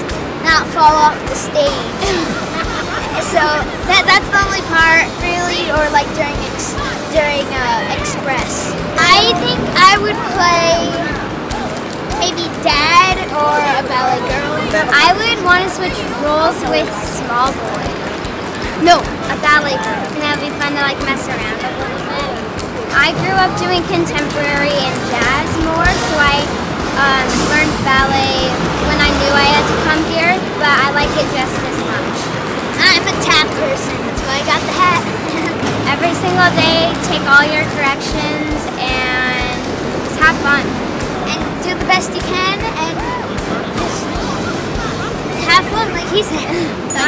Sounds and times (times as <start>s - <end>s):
Music: 0.0s - 47.0s
Speech: 3.2s - 11.2s, 12.2s - 18.0s, 18.8s - 40.7s, 41.3s - 47.0s.